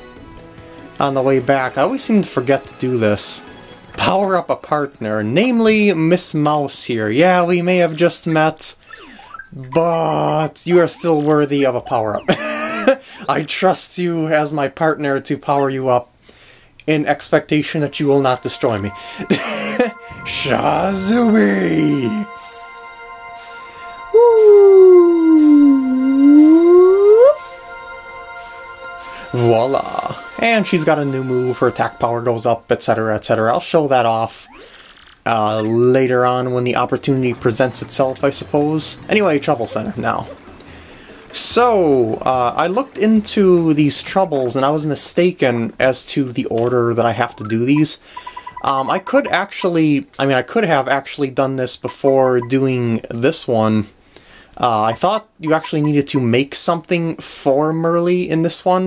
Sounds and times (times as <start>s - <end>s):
Music: 0.0s - 6.1s, 17.6s - 32.9s, 36.4s - 49.4s
Speech: 1.0s - 3.4s, 4.0s - 8.8s, 9.6s - 12.4s, 13.2s - 16.1s, 16.8s - 19.0s, 20.2s - 22.3s, 24.2s - 27.4s, 29.4s - 34.5s, 35.3s - 40.4s, 41.4s - 48.0s, 48.6s - 54.0s, 54.6s - 58.8s.